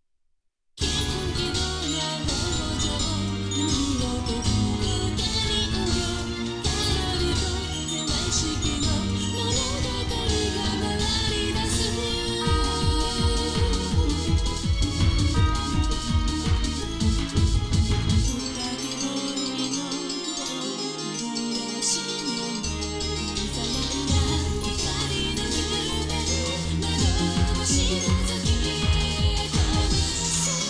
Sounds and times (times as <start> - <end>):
Jingle (music): 0.8 - 30.6
Video game music: 0.8 - 30.6.